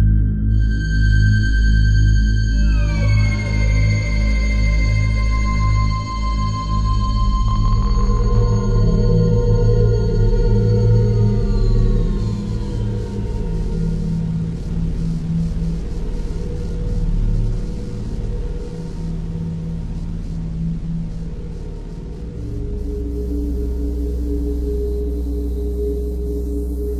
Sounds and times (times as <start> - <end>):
Ambient music: 0.0 - 26.9.